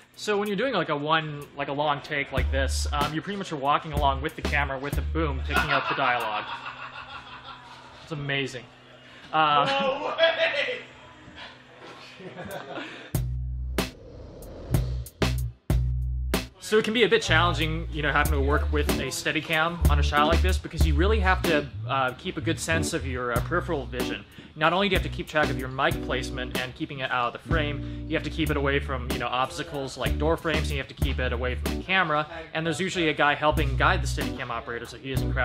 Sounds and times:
Speech: 0:00.2 - 0:06.4, 0:08.1 - 0:08.7, 0:09.3 - 0:10.9, 0:16.6 - 0:35.4
Music: 0:02.2 - 0:06.4, 0:13.1 - 0:32.1, 0:33.2 - 0:35.4.

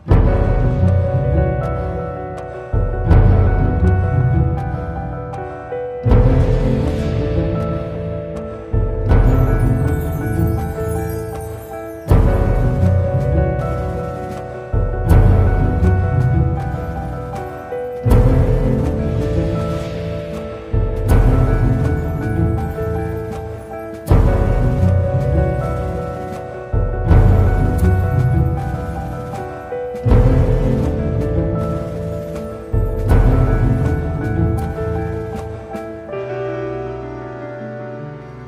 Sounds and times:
Music: 0:00.0 - 0:38.4.

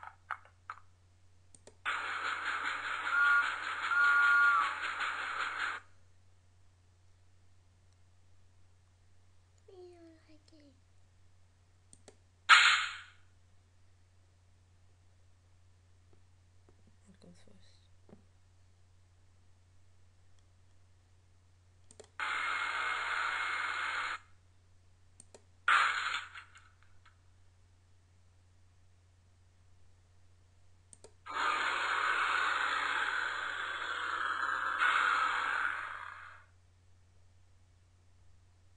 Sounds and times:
Speech: 0:09.6 - 0:10.8, 0:16.8 - 0:18.0.

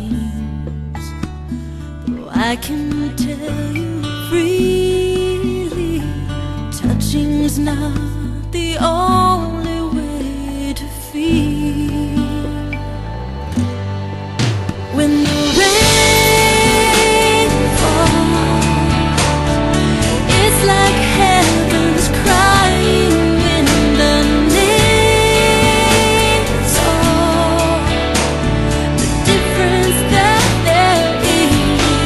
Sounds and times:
Music: 0:00.0 - 0:32.0.

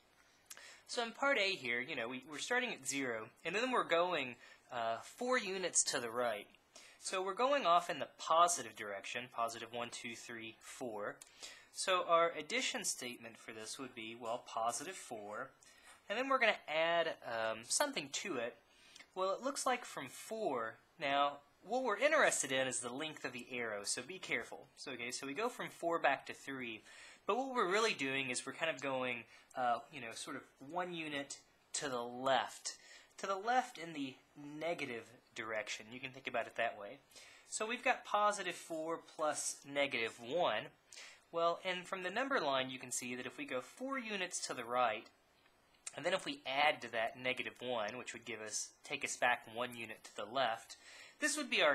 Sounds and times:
Speech: 0:00.9 - 0:11.2, 0:11.8 - 0:45.2, 0:45.9 - 0:51.7.

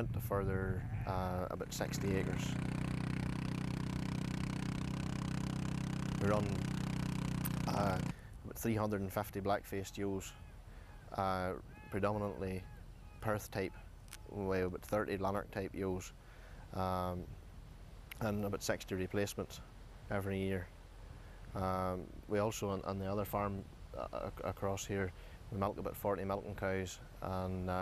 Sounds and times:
Speech: 0:00.0 - 0:02.6, 0:06.2 - 0:06.7, 0:07.5 - 0:10.4, 0:11.1 - 0:16.1, 0:16.7 - 0:17.4, 0:18.2 - 0:20.7, 0:21.6 - 0:27.8.

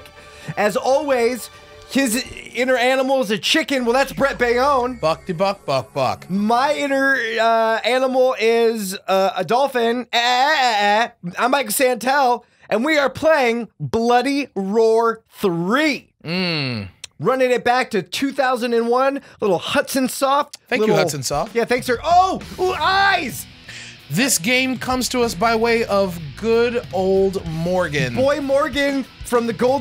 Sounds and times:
Music: 0:00.0 - 0:08.4, 0:20.6 - 0:29.8
Speech: 0:00.6 - 0:23.4, 0:24.1 - 0:29.8.

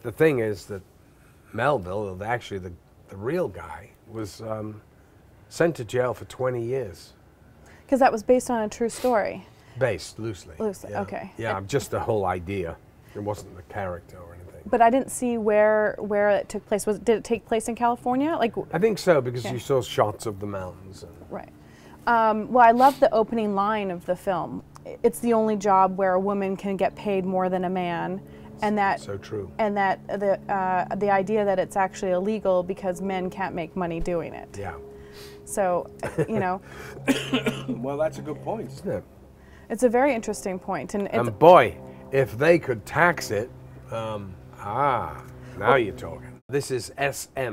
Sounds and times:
Male speech, man speaking: 0:00.0 - 0:00.8, 0:01.5 - 0:04.8, 0:05.5 - 0:07.2, 0:09.8 - 0:14.8, 0:18.6 - 0:21.2, 0:29.0 - 0:29.6, 0:34.6 - 0:34.8, 0:37.5 - 0:39.0, 0:41.2 - 0:47.5.

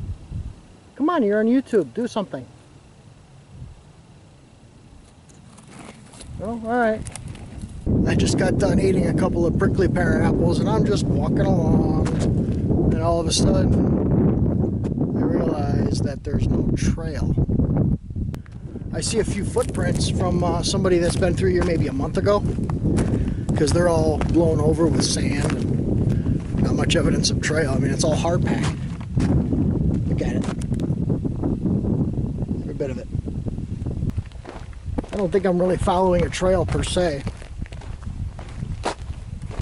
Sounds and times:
Outside, rural or natural: 0:00.0 - 0:39.6
Speech: 0:08.0 - 0:12.3, 0:12.9 - 0:13.8, 0:15.2 - 0:17.4, 0:18.9 - 0:22.5, 0:23.6 - 0:25.6, 0:26.6 - 0:28.8, 0:30.1 - 0:30.6, 0:32.6 - 0:33.1, 0:35.1 - 0:37.3.

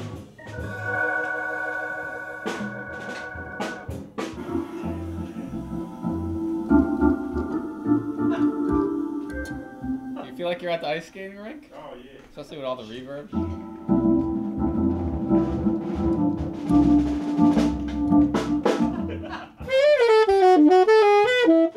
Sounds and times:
Music: 0:00.0 - 0:11.0, 0:13.3 - 0:21.7
Speech: 0:10.2 - 0:13.4.

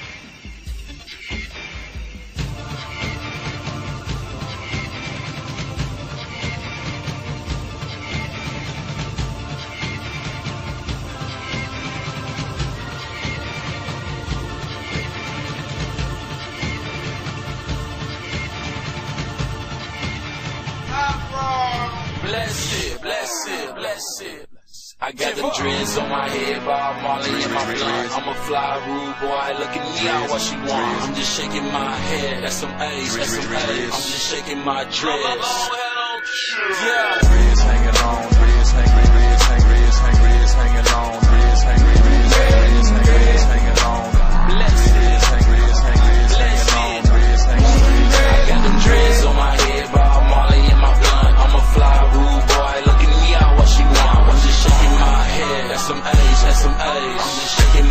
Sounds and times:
Music: 0:00.0 - 0:23.8, 0:25.1 - 0:57.9.

